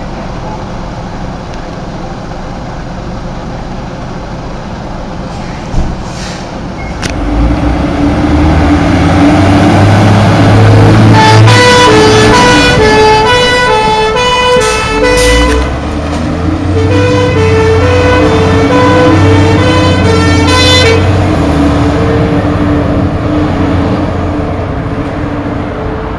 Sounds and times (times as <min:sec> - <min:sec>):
Fire engine, fire truck (siren): 0:07.9 - 0:24.0.